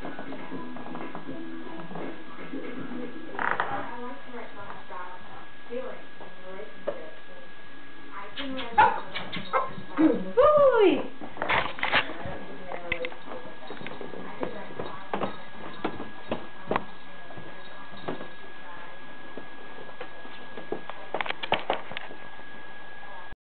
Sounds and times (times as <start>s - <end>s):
Speech: 0.1s - 11.2s, 11.8s - 21.2s, 22.9s - 23.4s.